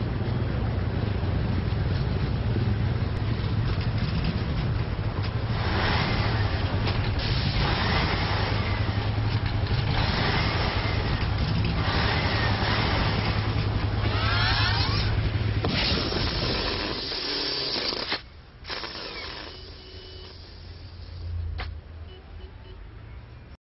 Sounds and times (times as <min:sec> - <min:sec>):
Vehicle: 0:00.0 - 0:23.6.